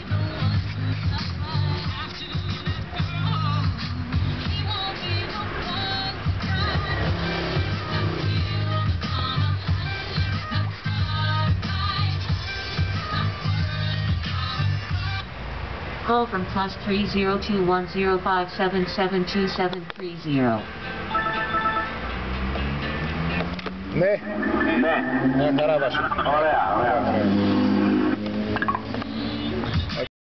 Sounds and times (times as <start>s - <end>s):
Car: 0.0s - 30.1s
Speech: 24.0s - 27.4s.